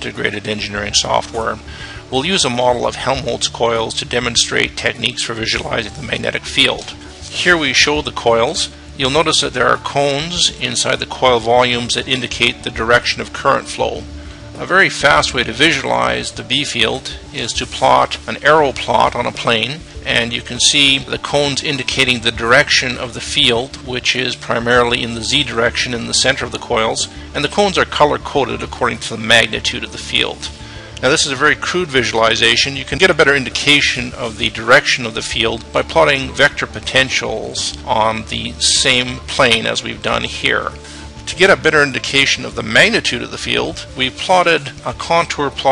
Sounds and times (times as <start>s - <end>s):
Music: 0.0s - 45.7s
Speech: 0.0s - 45.7s.